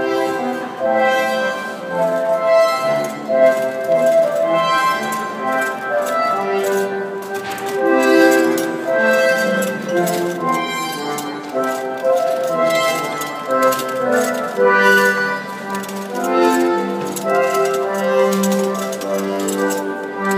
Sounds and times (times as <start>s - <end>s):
Music: 0.0s - 20.3s.